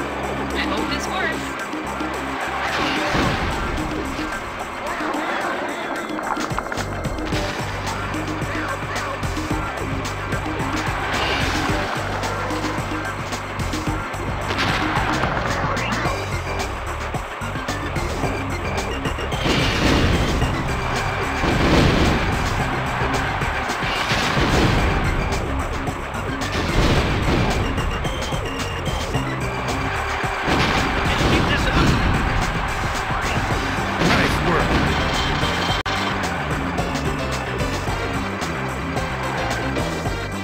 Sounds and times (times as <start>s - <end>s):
Music: 0.0s - 40.4s.